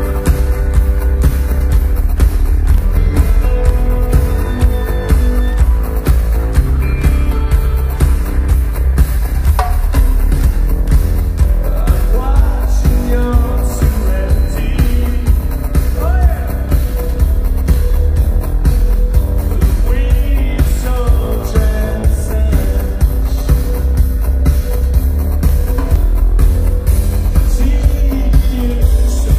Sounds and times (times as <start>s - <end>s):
Pop music: 0.0s - 29.3s
Rock and roll: 0.0s - 29.3s.